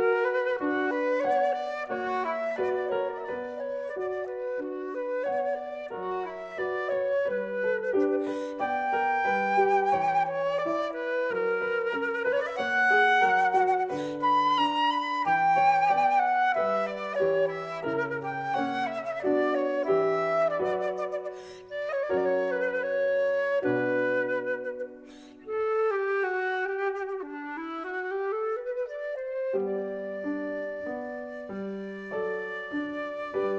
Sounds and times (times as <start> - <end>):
Classical music: 0.0 - 33.5
Flute: 0.0 - 33.5.